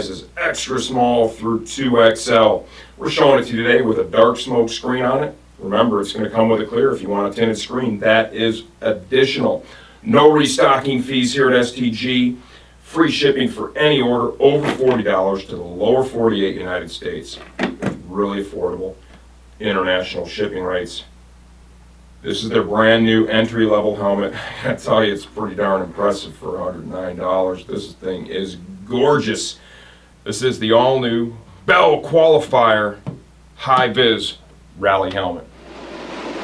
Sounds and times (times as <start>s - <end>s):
Speech: 0.0s - 19.0s, 19.6s - 21.2s, 22.2s - 29.6s, 30.2s - 35.5s.